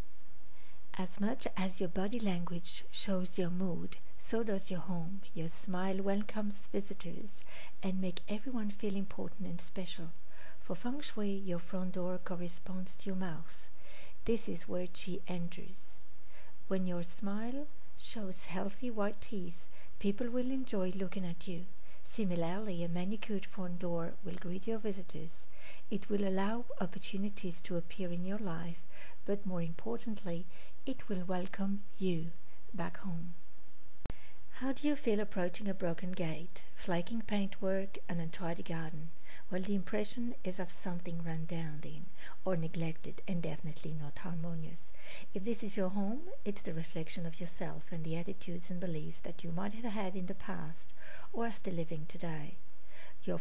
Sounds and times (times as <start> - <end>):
Speech: 0.9 - 15.8, 16.7 - 33.3, 34.6 - 52.6, 53.2 - 53.4.